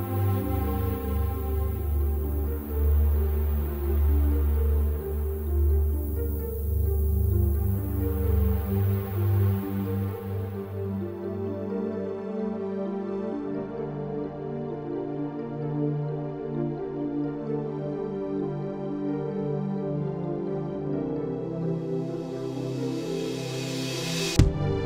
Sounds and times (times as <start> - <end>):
Tender music: 0.0 - 24.8.